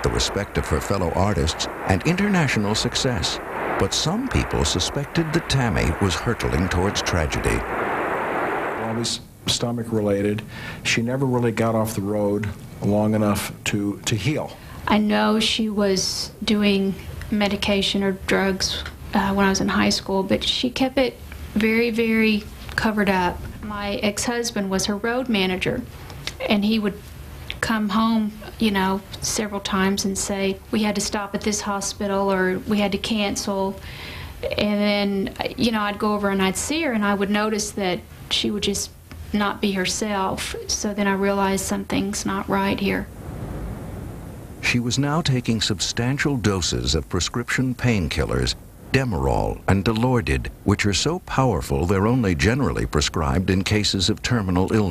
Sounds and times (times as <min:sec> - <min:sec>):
Speech: 0:00.0 - 0:07.7, 0:08.8 - 0:27.0, 0:27.6 - 0:33.8, 0:34.4 - 0:43.1, 0:44.6 - 0:54.9.